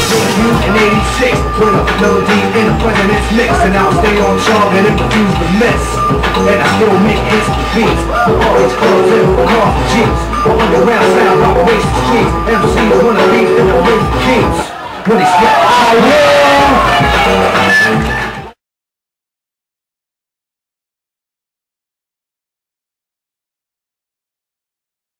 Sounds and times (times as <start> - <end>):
Music: 0.0 - 14.8, 15.7 - 18.6
Speech: 15.0 - 17.2.